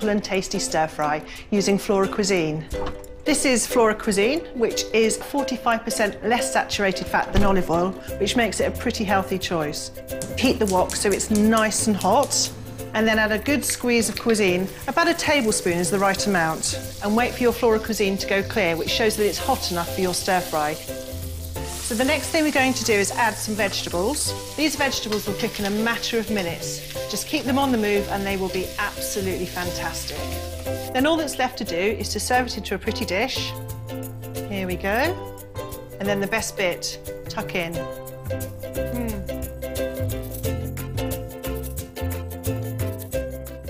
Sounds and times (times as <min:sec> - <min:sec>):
Music: 0:00.0 - 0:43.7
Speech: 0:03.3 - 0:20.8, 0:31.0 - 0:33.5, 0:34.5 - 0:35.2, 0:36.0 - 0:37.8.